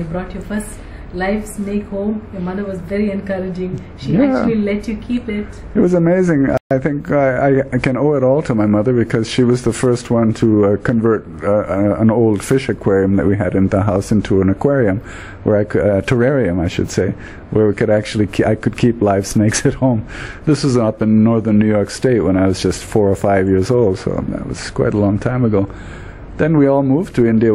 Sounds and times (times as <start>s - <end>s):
Speech: 0.0s - 25.7s, 26.4s - 27.5s.